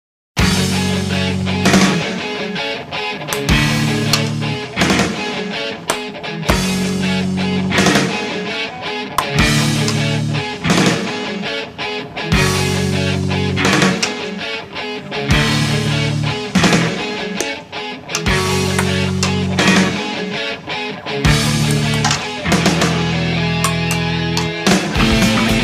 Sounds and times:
Grunge: 0.4s - 25.6s
Progressive rock: 0.4s - 25.6s.

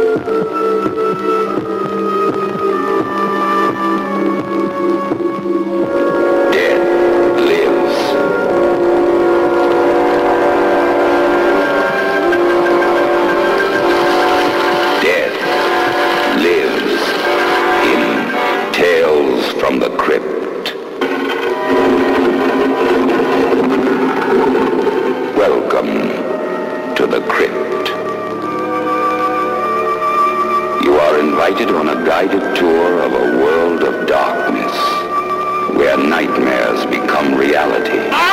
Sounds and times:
Music: 0.0s - 38.3s
Speech: 6.5s - 8.2s, 15.0s - 15.5s, 16.3s - 17.2s, 17.8s - 20.8s, 25.4s - 26.3s, 27.0s - 28.0s, 30.8s - 35.1s, 35.7s - 38.3s.

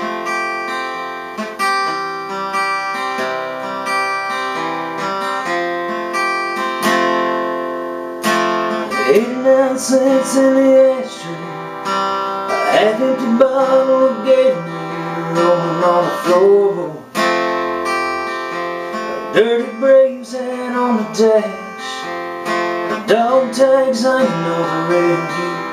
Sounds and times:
Music: 0.0s - 25.7s.

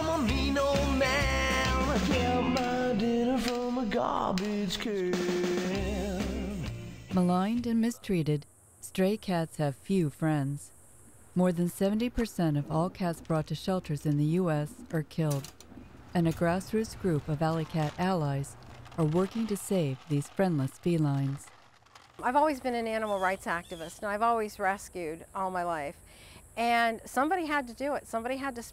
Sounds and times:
Speech: 7.2s - 10.7s, 11.4s - 15.5s, 16.2s - 21.4s, 22.2s - 26.0s, 26.6s - 28.7s.

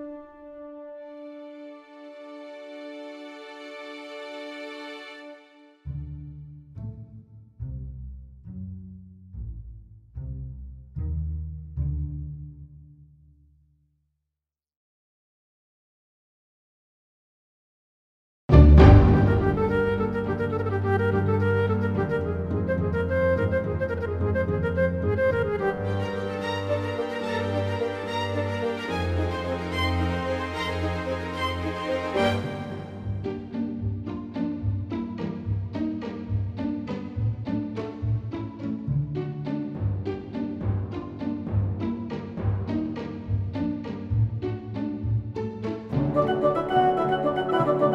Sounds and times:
Violin, fiddle: 1.1s - 5.8s, 18.5s - 40.5s.

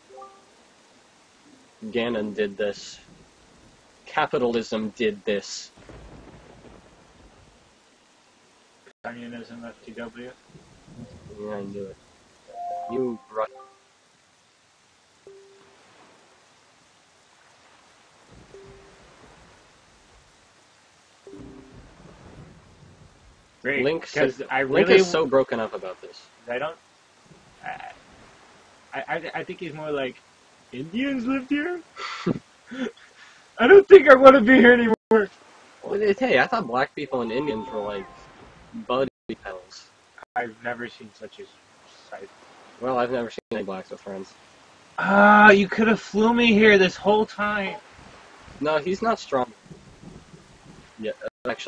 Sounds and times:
Speech: 1.8s - 3.0s, 4.1s - 5.7s, 9.1s - 10.4s, 11.3s - 12.0s, 12.9s - 13.6s, 23.7s - 26.8s, 29.0s - 30.2s, 30.8s - 32.9s, 33.6s - 38.2s, 38.8s - 39.8s, 40.4s - 41.5s, 42.1s - 44.3s, 45.0s - 47.8s, 48.6s - 49.5s, 51.0s - 51.6s.

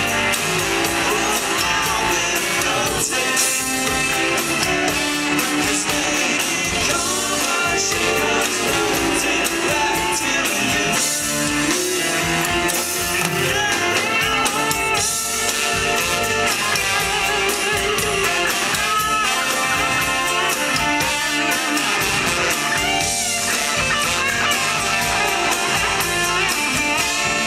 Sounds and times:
Pop music: 0.0s - 27.4s.

